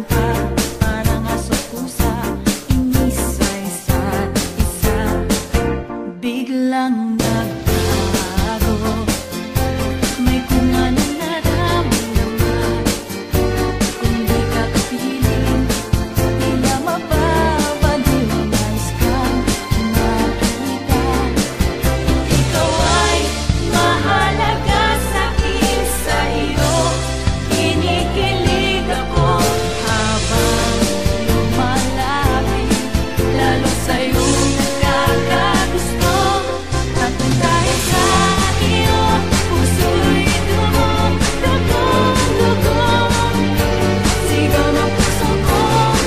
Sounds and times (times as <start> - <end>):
Music: 0.0 - 46.0.